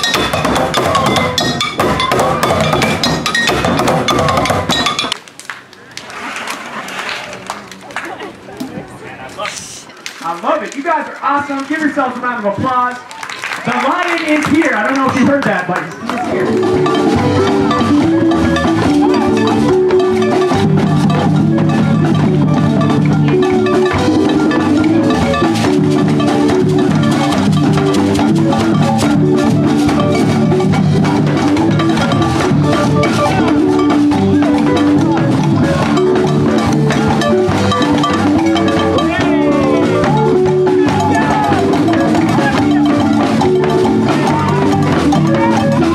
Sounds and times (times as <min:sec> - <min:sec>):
Percussion: 0:00.0 - 0:45.9
Speech: 0:08.2 - 0:13.0, 0:13.6 - 0:16.6.